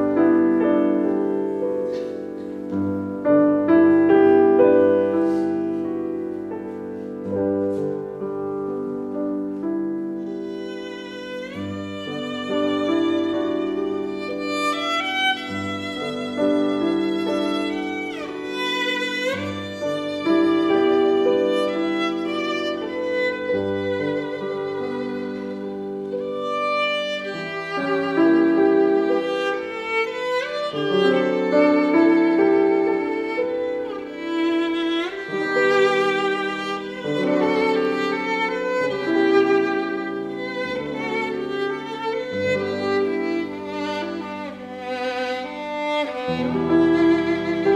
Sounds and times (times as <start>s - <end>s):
Violin, fiddle: 0.0s - 47.7s.